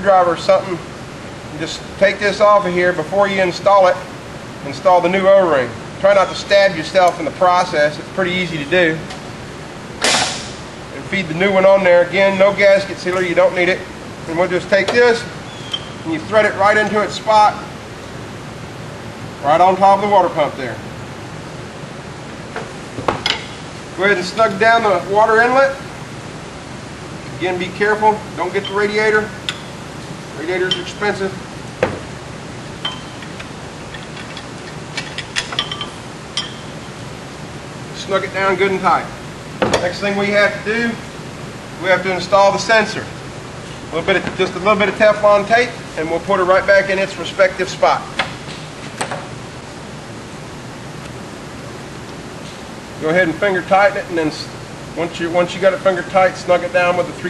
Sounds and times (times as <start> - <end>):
Speech: 0.0 - 0.8, 1.5 - 9.1, 11.0 - 15.3, 16.0 - 17.7, 19.4 - 20.8, 24.0 - 25.8, 27.4 - 29.4, 30.4 - 31.4, 38.0 - 39.1, 39.8 - 41.0, 41.8 - 43.1, 43.9 - 48.2, 53.0 - 57.2.